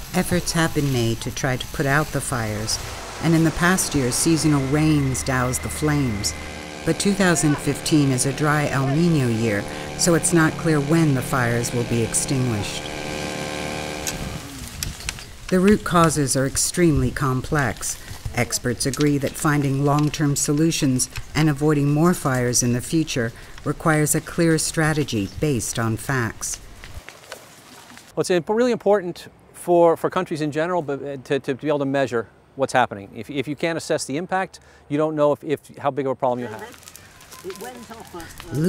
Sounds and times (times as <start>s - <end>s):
Speech: 6.9s - 12.8s, 15.5s - 26.6s, 28.2s - 36.8s, 37.5s - 38.6s.